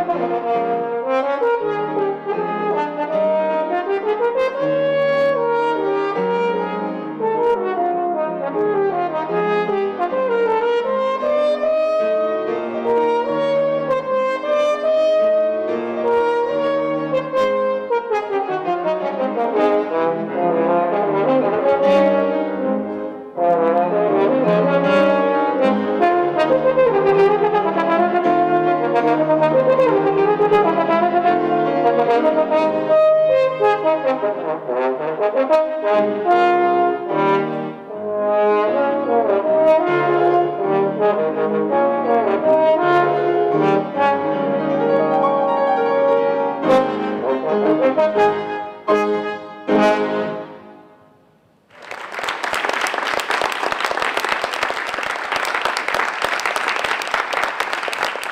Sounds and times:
French horn: 0.0s - 51.2s.

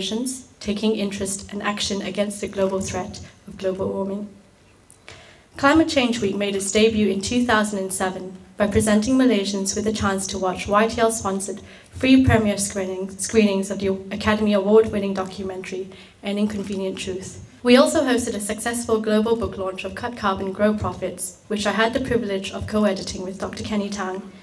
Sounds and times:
Female speech, woman speaking: 0.0s - 4.4s, 5.6s - 24.3s
Narration, monologue: 0.0s - 24.4s.

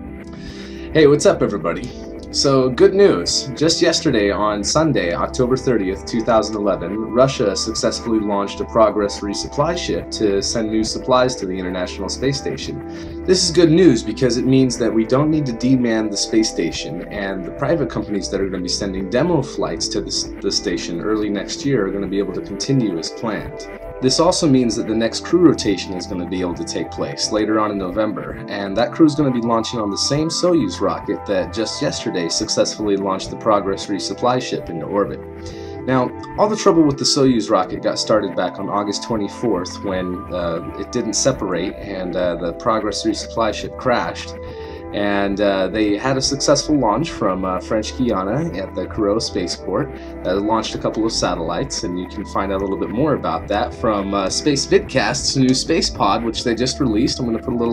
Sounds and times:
Music: 0.0s - 57.7s
Narration, monologue: 0.0s - 57.7s.

